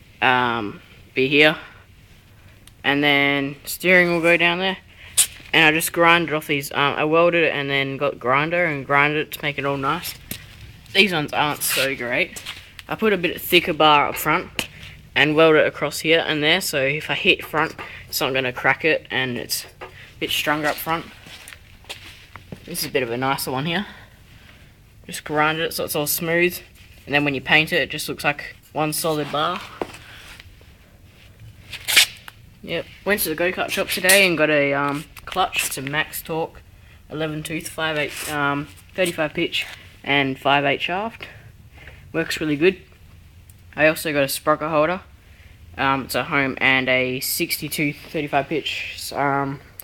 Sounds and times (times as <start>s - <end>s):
Speech: 0.2s - 1.8s, 2.8s - 4.9s, 5.5s - 10.2s, 10.9s - 21.2s, 22.6s - 24.0s, 25.1s - 29.8s, 32.6s - 41.4s, 42.1s - 42.9s, 43.8s - 45.1s, 45.8s - 49.8s.